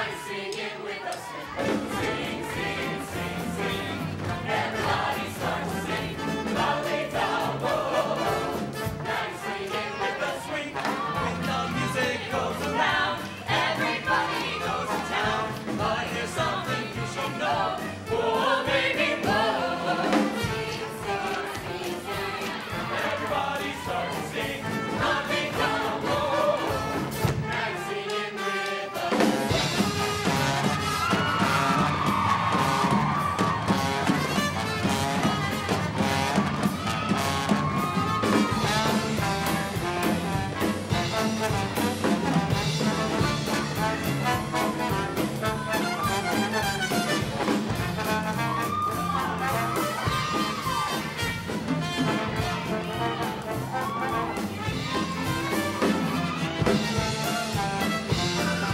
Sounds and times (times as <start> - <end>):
Music: 0.0 - 58.7.